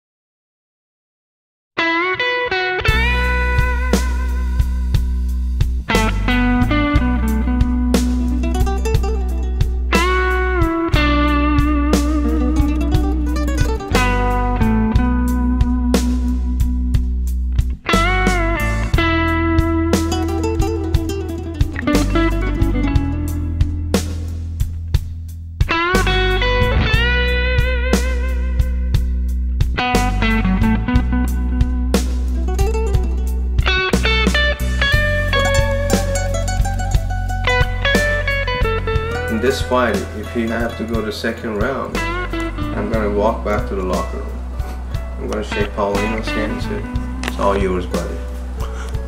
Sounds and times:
Music: 1.8s - 49.0s
Speech: 39.2s - 42.0s, 42.7s - 44.3s, 45.2s - 48.3s.

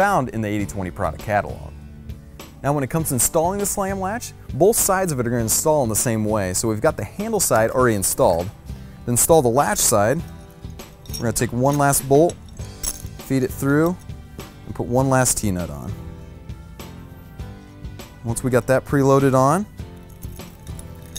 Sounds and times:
Speech: 0.0s - 1.7s, 2.6s - 8.5s, 11.2s - 12.4s, 13.3s - 14.0s, 14.7s - 16.0s, 18.2s - 19.7s
Music: 0.0s - 21.1s.

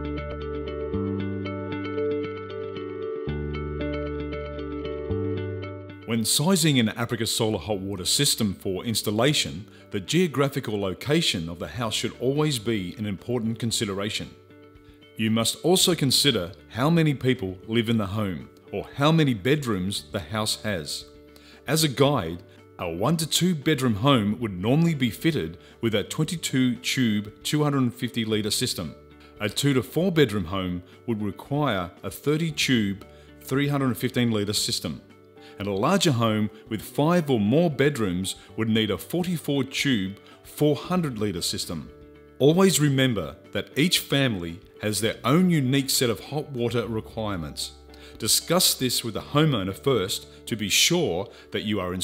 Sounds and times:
Music: 0.0s - 52.0s
Speech: 6.1s - 14.4s, 15.2s - 21.1s, 21.7s - 35.0s, 35.6s - 52.0s.

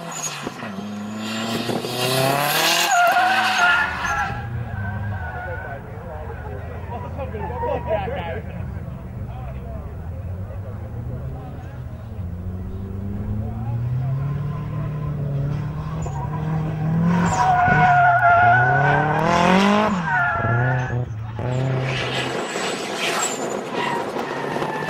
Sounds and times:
Race car, auto racing: 0.0s - 24.9s
Speech: 5.2s - 12.3s.

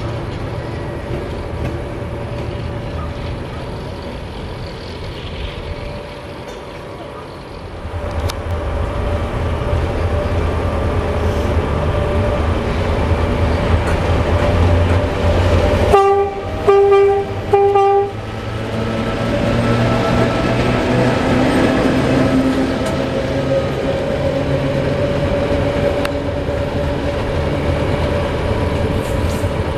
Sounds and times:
Railroad car, train wagon: 0.0s - 29.7s
Train horn: 15.8s - 18.2s.

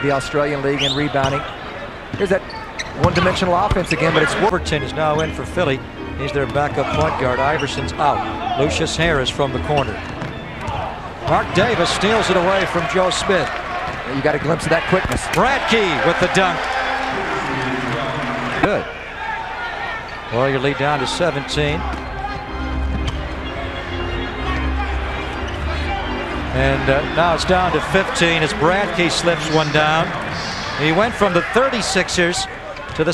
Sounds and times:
Speech: 0.0s - 1.5s, 2.2s - 10.0s, 11.2s - 16.6s, 17.3s - 18.9s, 20.3s - 21.9s, 26.6s - 33.1s
Inside, large room or hall: 0.0s - 33.1s
Music: 4.1s - 13.0s, 16.1s - 18.7s, 21.0s - 31.1s.

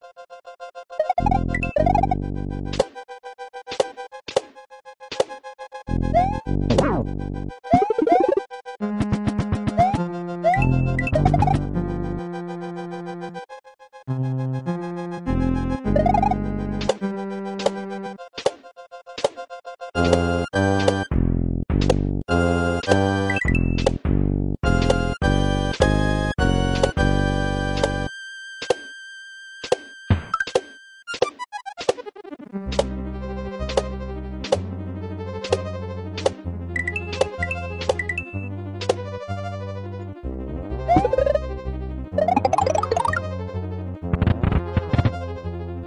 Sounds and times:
Music: 0.1s - 45.8s.

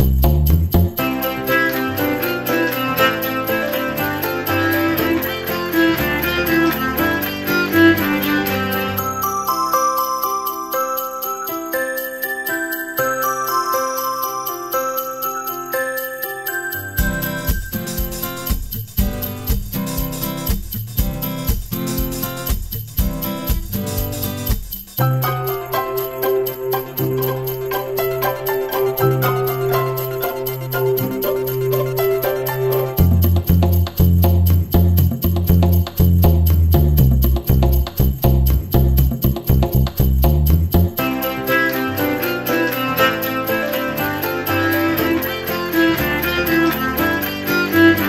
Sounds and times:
Christmas music: 0.0s - 48.0s
Christian music: 0.9s - 15.2s, 15.8s - 20.7s, 25.0s - 36.6s, 40.9s - 48.0s.

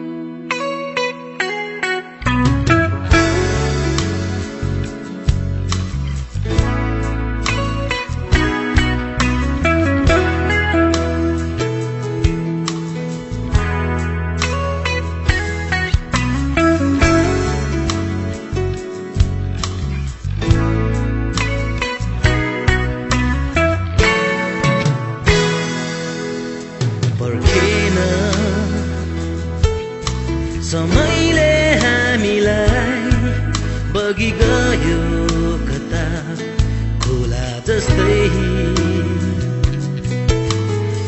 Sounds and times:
Steel guitar, slide guitar: 0.0s - 41.0s.

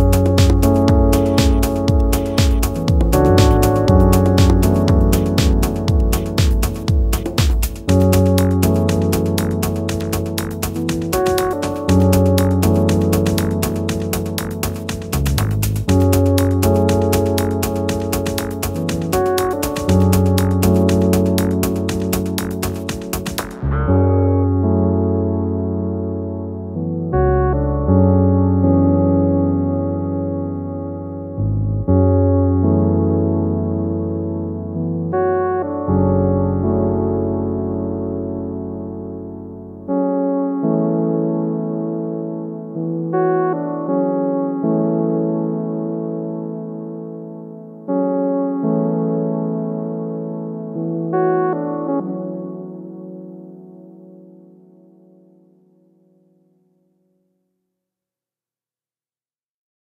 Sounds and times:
Music: 0.0s - 57.6s.

